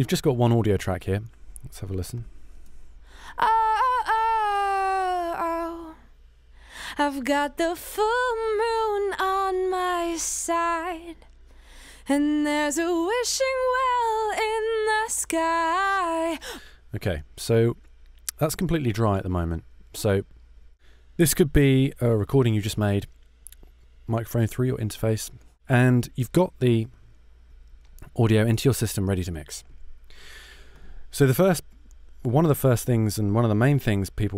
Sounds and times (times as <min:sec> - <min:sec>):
Speech: 0:00.0 - 0:02.3, 0:17.0 - 0:20.2, 0:21.2 - 0:23.1, 0:24.1 - 0:26.9, 0:28.0 - 0:29.6, 0:31.1 - 0:31.6, 0:32.2 - 0:34.3.